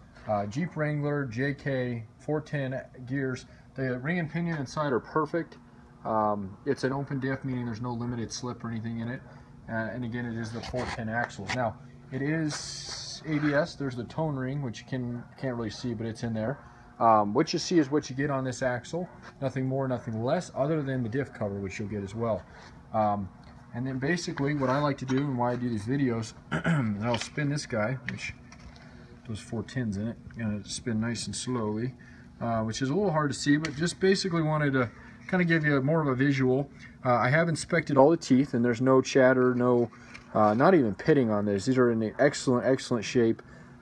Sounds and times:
Speech: 0:00.2 - 0:28.4, 0:29.2 - 0:43.4.

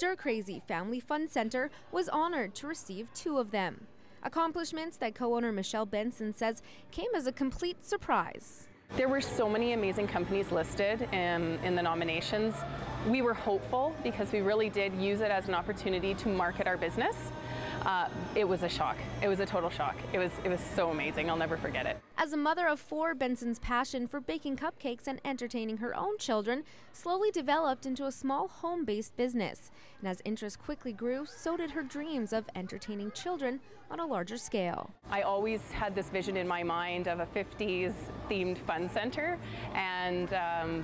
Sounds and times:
Speech: 0:00.0 - 0:40.8.

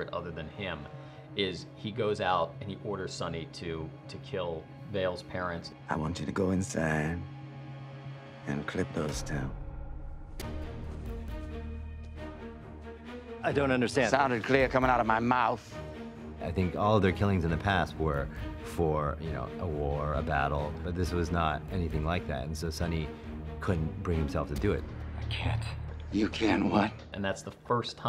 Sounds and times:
Music: 0:00.0 - 0:28.0.

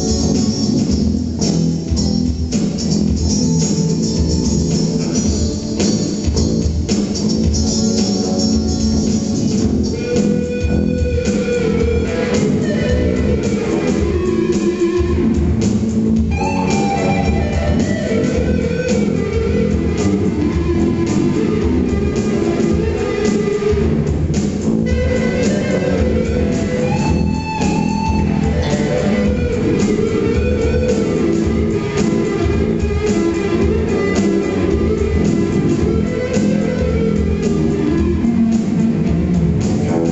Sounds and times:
Bass guitar: 0:00.0 - 0:40.1.

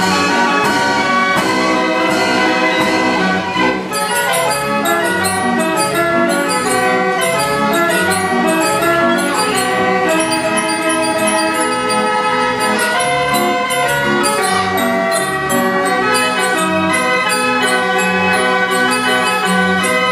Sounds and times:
Inside, large room or hall: 0:00.0 - 0:20.1
Music: 0:00.0 - 0:20.1.

